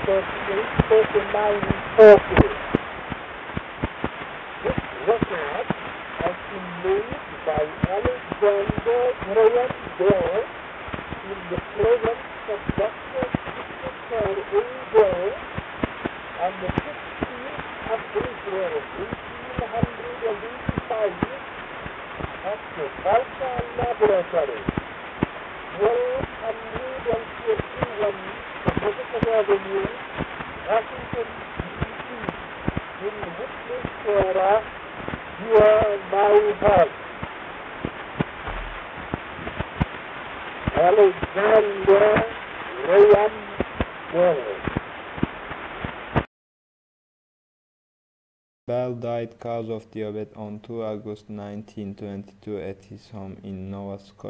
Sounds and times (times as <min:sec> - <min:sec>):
Speech: 0:00.0 - 0:02.6, 0:04.6 - 0:05.6, 0:06.2 - 0:10.5, 0:11.2 - 0:15.4, 0:16.4 - 0:21.4, 0:22.4 - 0:24.7, 0:25.8 - 0:30.0, 0:30.7 - 0:32.3, 0:33.0 - 0:34.7, 0:35.4 - 0:36.9, 0:40.8 - 0:44.6, 0:48.7 - 0:54.2.